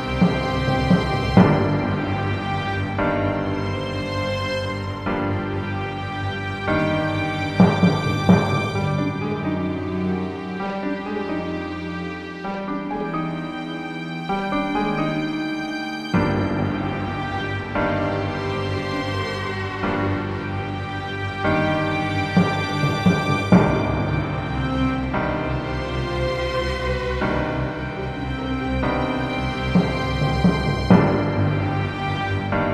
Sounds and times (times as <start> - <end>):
Background music: 0.0 - 32.7.